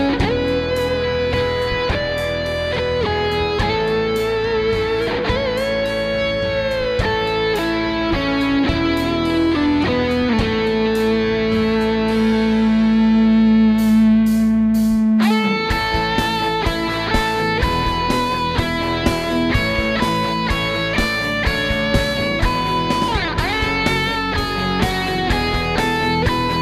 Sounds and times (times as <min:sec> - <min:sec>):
Guitar: 0:00.0 - 0:26.6
Rock music: 0:00.0 - 0:26.6.